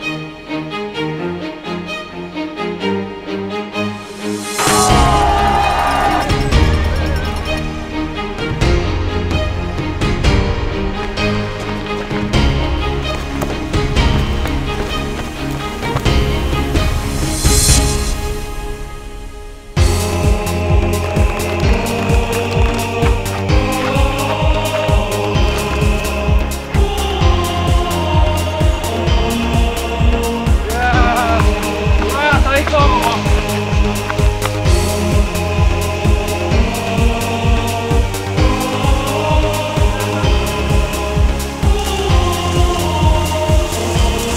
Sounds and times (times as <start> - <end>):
Music: 0.0 - 44.3
Run: 5.0 - 17.0, 19.8 - 28.8, 30.5 - 36.2
Speech: 30.7 - 31.5, 32.1 - 33.2.